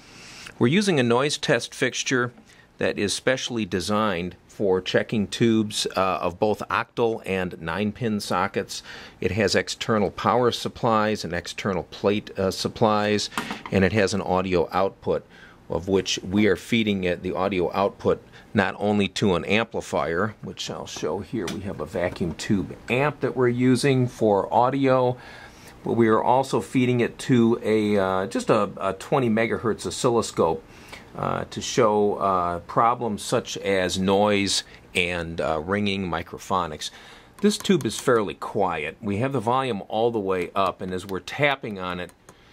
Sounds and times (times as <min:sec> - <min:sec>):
Speech: 0:00.6 - 0:25.2, 0:25.8 - 0:42.2.